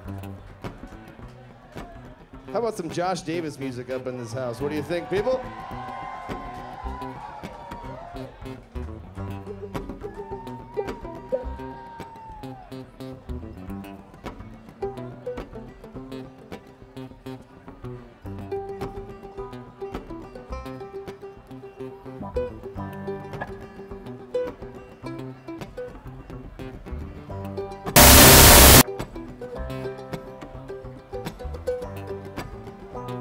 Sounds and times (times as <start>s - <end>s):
Speech: 0.8s - 5.4s.